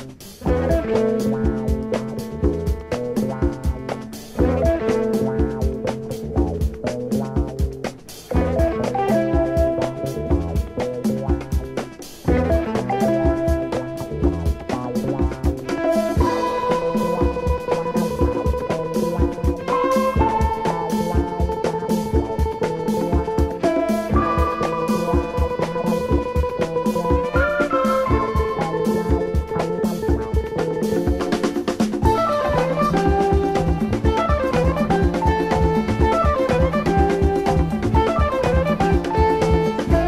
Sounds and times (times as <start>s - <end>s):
Music: 0.0s - 40.0s.